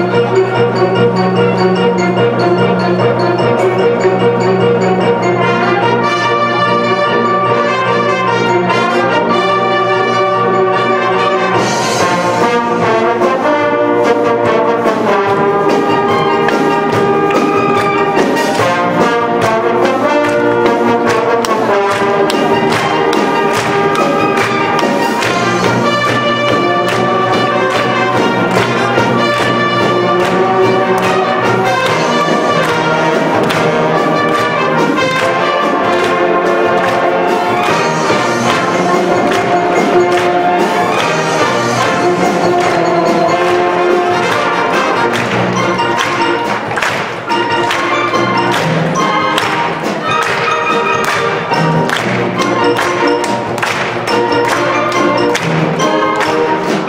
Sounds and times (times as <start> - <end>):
Music: 0.0 - 56.8.